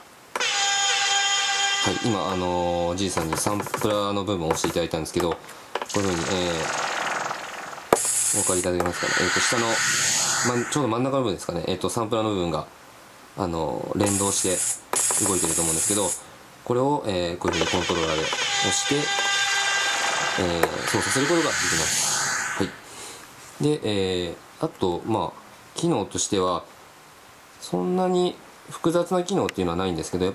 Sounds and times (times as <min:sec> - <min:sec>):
Speech: 0:01.9 - 0:06.7, 0:08.4 - 0:09.8, 0:10.5 - 0:12.7, 0:13.4 - 0:19.1, 0:20.4 - 0:22.0, 0:23.6 - 0:26.7, 0:27.6 - 0:30.3.